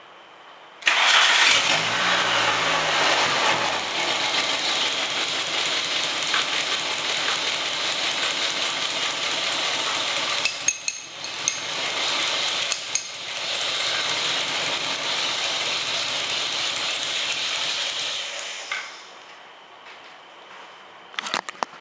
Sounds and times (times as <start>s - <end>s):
Engine: 0.8s - 19.2s.